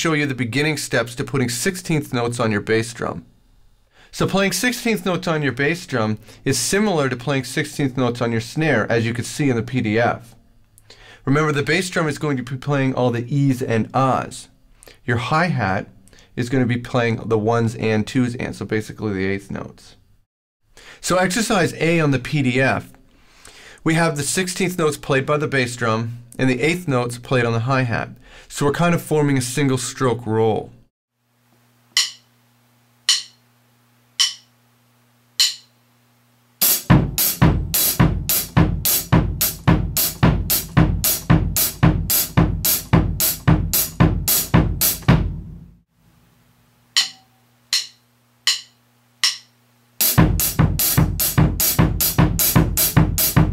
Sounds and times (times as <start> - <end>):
Speech: 0.0 - 3.3, 4.1 - 10.4, 11.2 - 20.0, 21.0 - 23.0, 23.8 - 30.8.